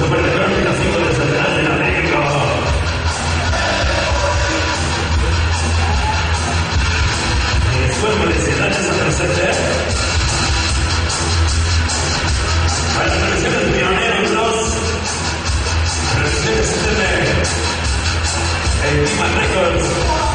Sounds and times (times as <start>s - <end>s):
Crowd: 0.0s - 20.3s
Rock and roll: 0.0s - 20.3s.